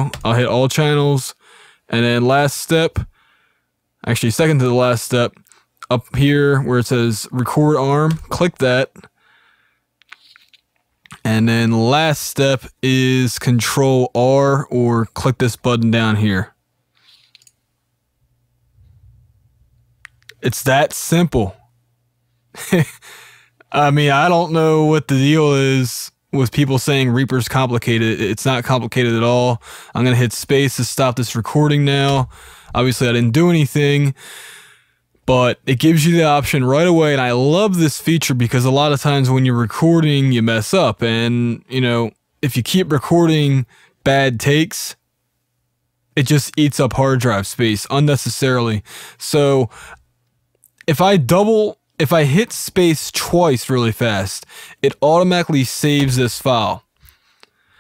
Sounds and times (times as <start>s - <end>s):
Speech: 0.0s - 3.1s, 4.0s - 9.1s, 11.1s - 16.6s, 20.3s - 21.6s, 22.6s - 23.0s, 23.6s - 34.2s, 35.3s - 45.0s, 46.2s - 49.8s, 50.8s - 56.9s.